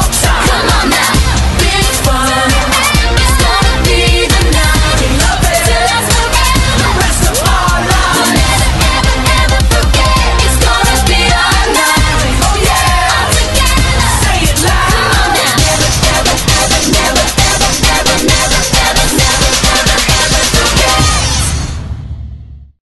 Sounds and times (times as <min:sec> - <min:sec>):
Dance music: 0:00.0 - 0:21.6.